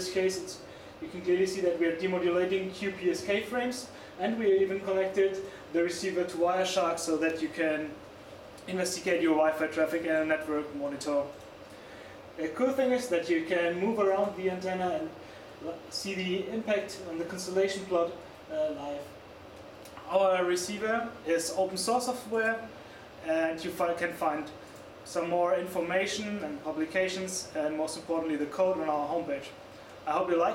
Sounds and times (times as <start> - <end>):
Speech: 0.0 - 8.0, 8.6 - 11.4, 12.4 - 19.2, 20.0 - 30.5.